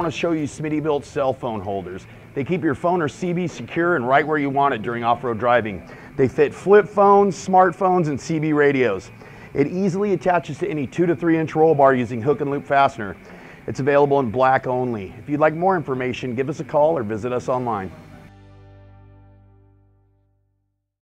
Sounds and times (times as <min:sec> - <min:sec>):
Speech: 0:00.0 - 0:18.1
Music: 0:14.1 - 0:20.9.